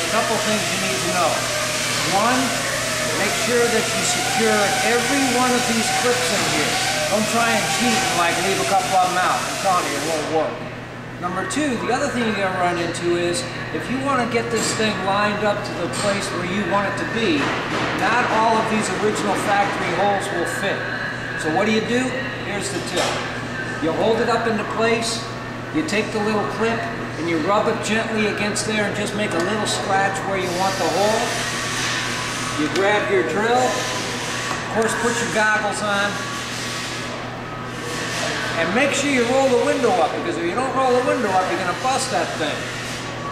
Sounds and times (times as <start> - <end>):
Speech: 0.0 - 1.4, 2.0 - 2.6, 3.2 - 10.6, 11.2 - 20.8, 21.4 - 31.4, 32.6 - 33.8, 34.8 - 36.2, 38.6 - 42.7.